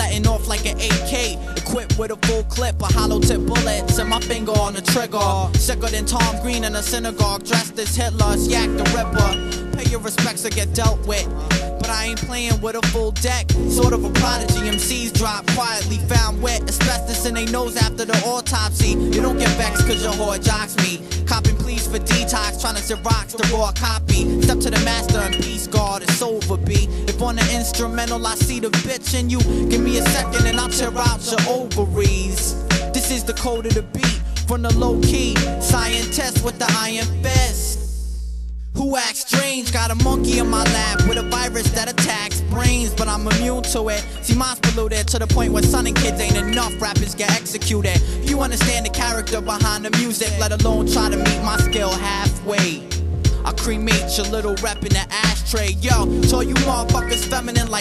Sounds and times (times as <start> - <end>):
Music: 0.0 - 57.8.